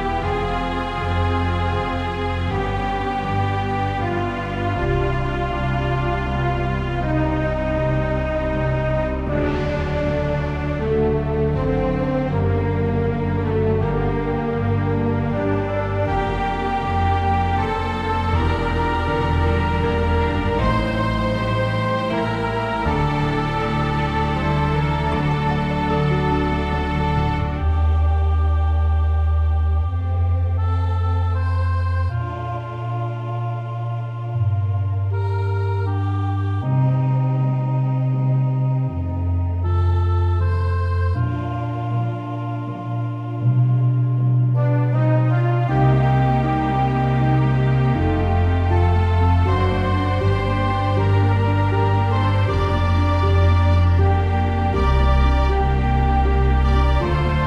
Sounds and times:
Music: 0.0s - 57.4s.

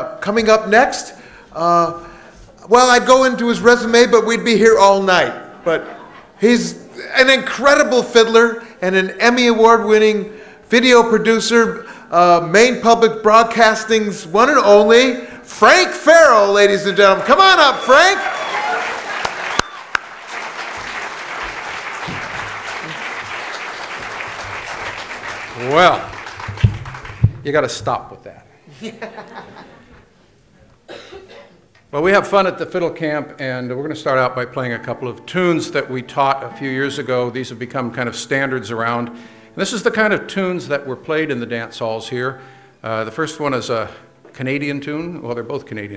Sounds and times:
Speech: 0.0s - 2.0s, 2.6s - 18.2s, 25.6s - 26.1s, 27.4s - 28.5s, 31.9s - 45.9s.

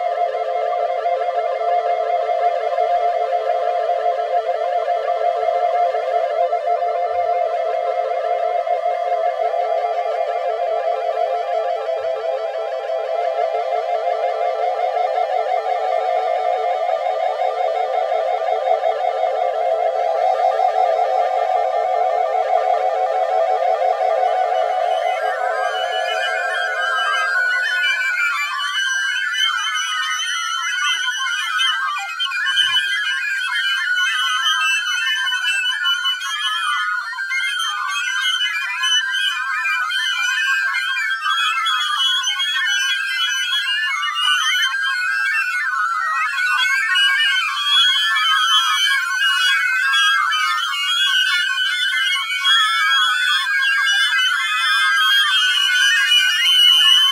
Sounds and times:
Musical instrument: 19.6s - 29.0s.

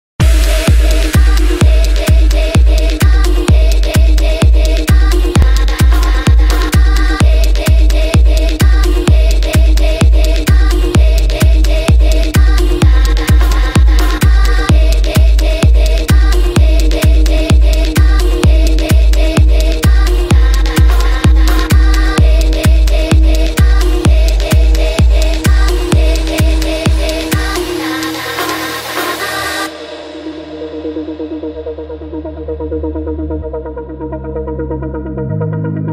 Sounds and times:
Electronic dance music: 0.2s - 35.9s.

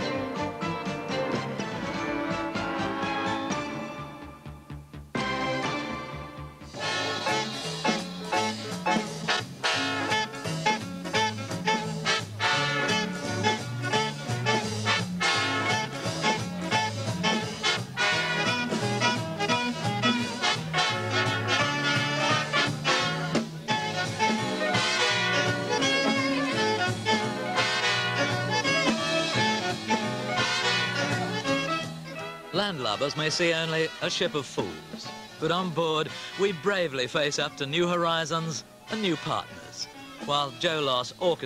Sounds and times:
Orchestra: 0.0s - 41.4s
Speech: 32.5s - 41.4s.

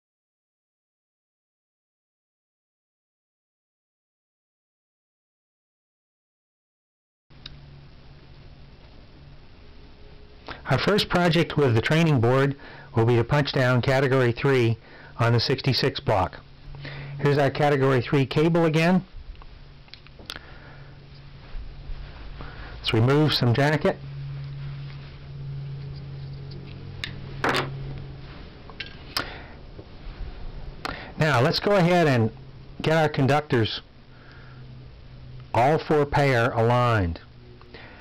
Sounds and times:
Speech: 10.7s - 16.4s, 17.2s - 19.1s, 22.8s - 24.0s, 31.2s - 33.9s, 35.6s - 37.3s.

